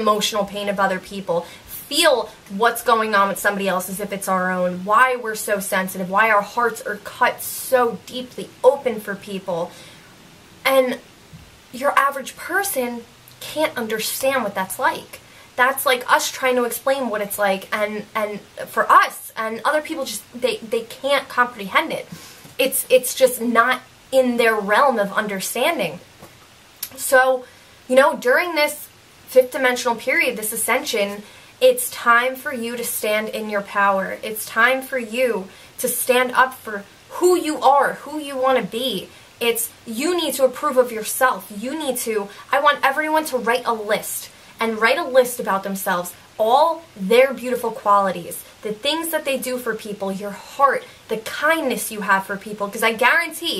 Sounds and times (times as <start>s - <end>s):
Speech: 0.0s - 9.7s, 10.7s - 11.0s, 11.7s - 26.0s, 26.8s - 53.5s.